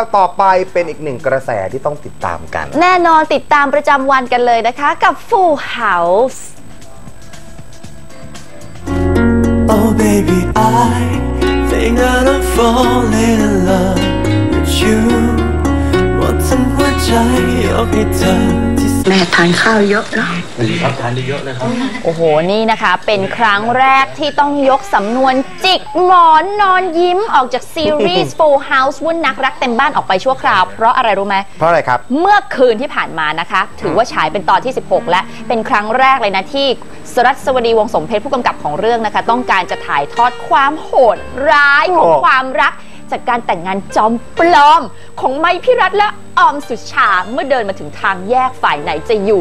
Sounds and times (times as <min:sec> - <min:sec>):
Music: 0:00.0 - 0:49.4.